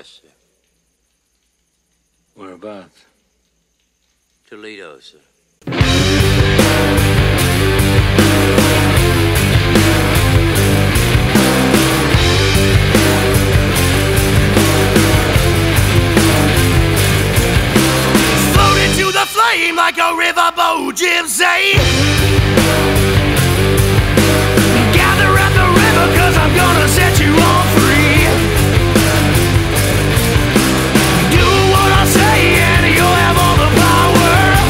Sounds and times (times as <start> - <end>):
Speech: 0.0 - 0.4, 2.4 - 3.1, 4.5 - 5.3
Music: 5.6 - 34.6.